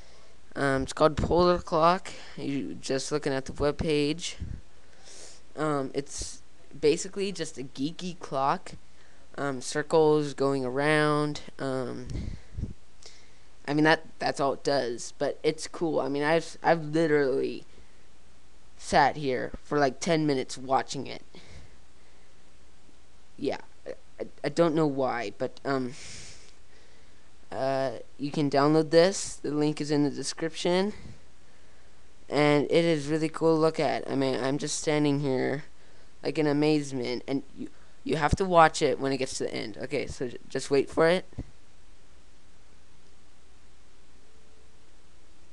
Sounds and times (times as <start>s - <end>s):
Speech: 0.6s - 4.6s, 5.6s - 12.4s, 13.7s - 17.7s, 18.8s - 21.5s, 23.4s - 26.1s, 27.5s - 31.2s, 32.3s - 41.5s.